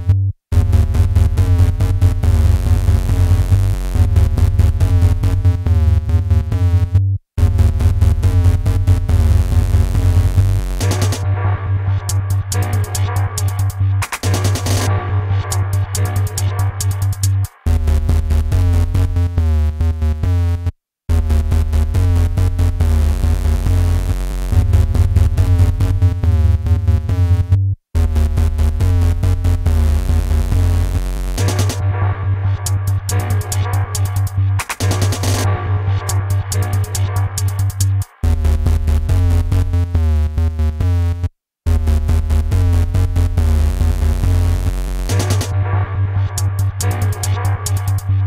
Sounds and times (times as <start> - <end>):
Electronic music: 0.0 - 6.9, 7.6 - 19.3, 28.0 - 39.8, 41.8 - 48.2.